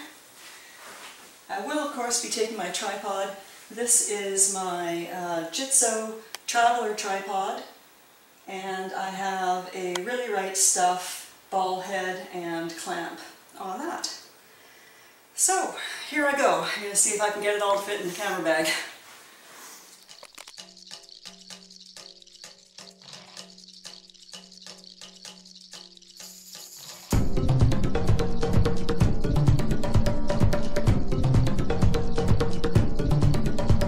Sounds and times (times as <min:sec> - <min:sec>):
Speech: 0:01.5 - 0:07.7, 0:08.5 - 0:14.3, 0:15.4 - 0:19.0.